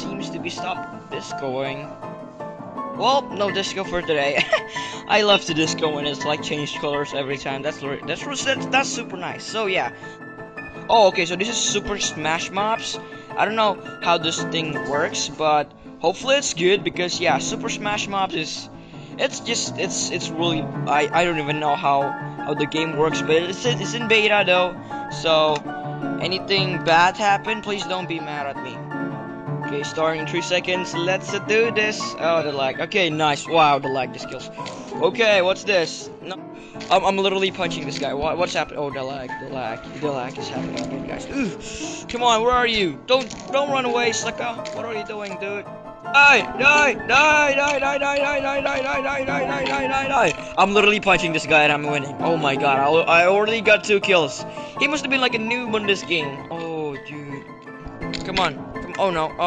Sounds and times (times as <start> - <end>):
Speech: 0.0 - 1.9, 3.0 - 10.0, 10.9 - 25.6, 26.2 - 28.8, 29.7 - 45.6, 46.2 - 57.4, 58.3 - 59.4
Music: 0.0 - 59.4.